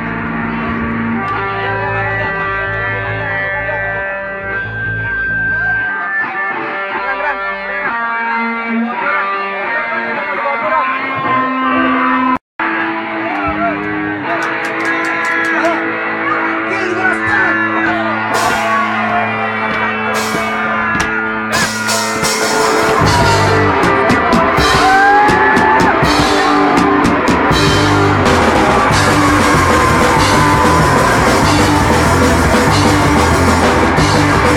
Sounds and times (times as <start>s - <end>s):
Music: 0.0s - 34.5s.